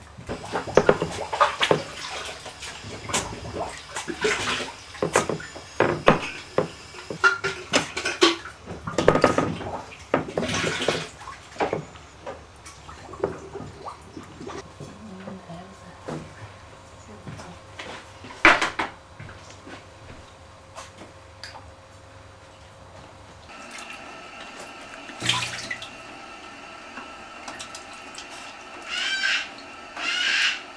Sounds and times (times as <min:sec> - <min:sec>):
Speech: 0:14.8 - 0:16.2, 0:17.0 - 0:17.7.